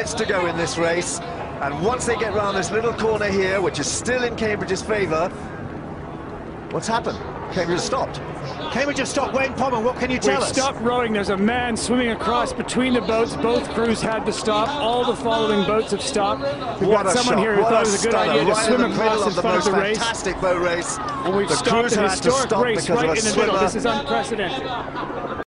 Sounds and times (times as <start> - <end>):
Speech: 0.0 - 5.3, 6.7 - 25.5.